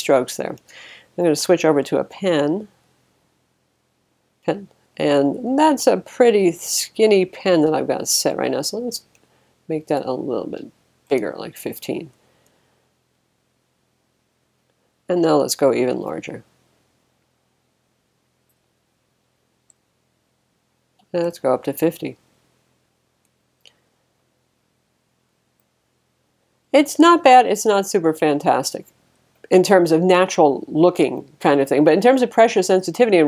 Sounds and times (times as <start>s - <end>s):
Speech: 0.0s - 0.6s, 1.2s - 2.7s, 4.5s - 9.1s, 9.7s - 12.1s, 15.1s - 16.5s, 21.1s - 22.2s, 26.8s - 28.9s, 29.5s - 33.2s
Inside, small room: 0.0s - 33.2s.